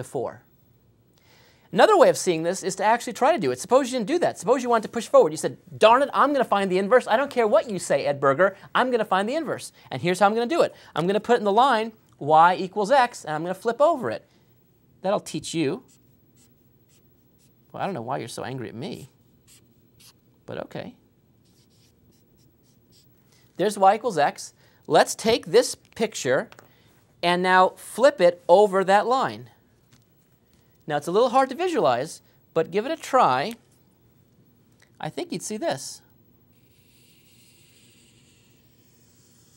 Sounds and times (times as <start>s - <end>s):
Speech: 1.7s - 14.2s, 20.5s - 21.0s, 23.6s - 26.5s, 27.2s - 29.6s, 30.9s - 33.6s, 35.0s - 36.1s
Writing: 15.9s - 17.6s, 21.4s - 23.1s, 36.6s - 39.5s.